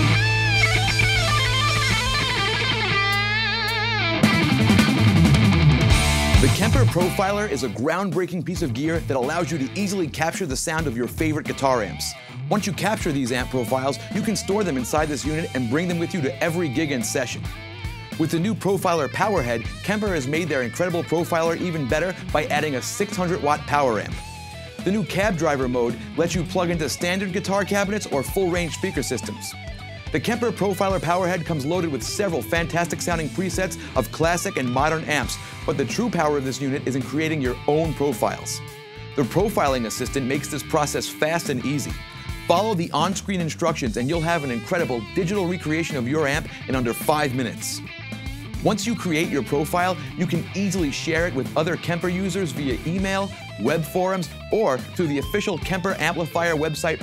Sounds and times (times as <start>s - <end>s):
Electric guitar: 0.0s - 7.8s, 11.7s - 43.0s, 44.0s - 57.0s
Speech: 6.4s - 17.5s, 18.2s - 24.2s, 24.8s - 38.6s, 39.2s - 47.9s, 48.6s - 57.0s.